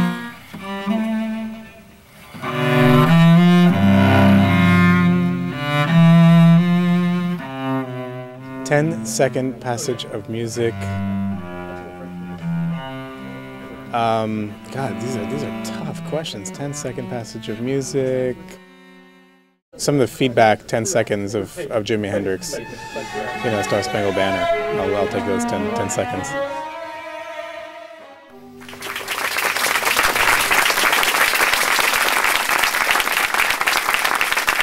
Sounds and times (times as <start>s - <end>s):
Cello: 0.0s - 19.6s, 21.3s - 34.6s.